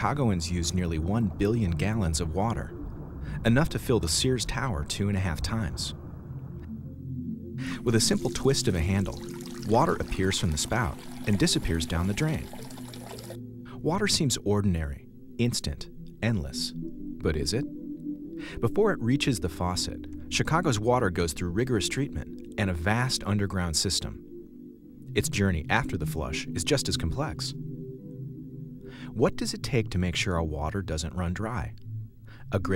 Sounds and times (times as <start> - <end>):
Water: 7.7 - 13.4
Sink (filling or washing): 8.1 - 13.4
Water tap, faucet: 8.1 - 13.4.